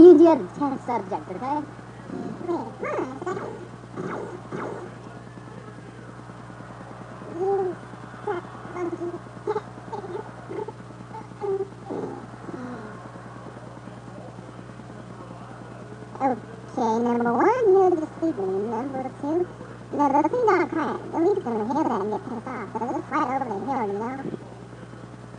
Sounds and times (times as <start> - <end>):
Speech: 0.0 - 3.6, 4.7 - 6.4, 11.4 - 25.2.